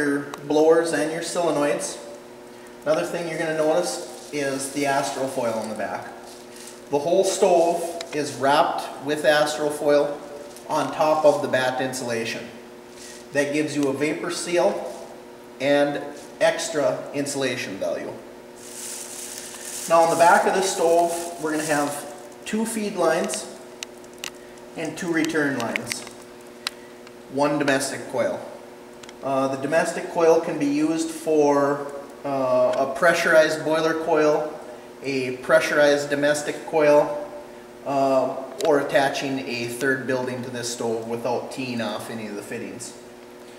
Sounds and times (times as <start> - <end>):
Speech: 0.0 - 2.1, 2.8 - 6.2, 6.9 - 12.6, 13.3 - 15.0, 15.6 - 18.3, 19.9 - 23.6, 24.8 - 26.1, 27.3 - 28.6, 29.2 - 37.3, 37.9 - 43.0.